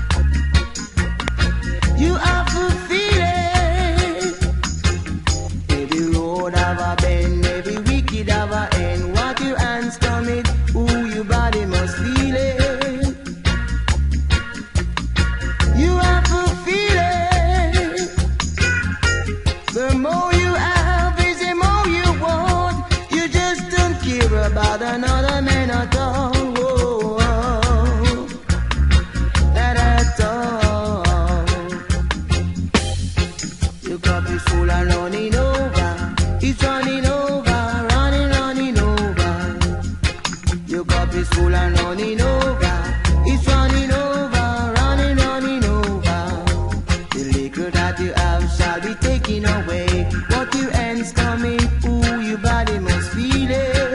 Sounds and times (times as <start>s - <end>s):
Reggae: 0.0s - 53.9s.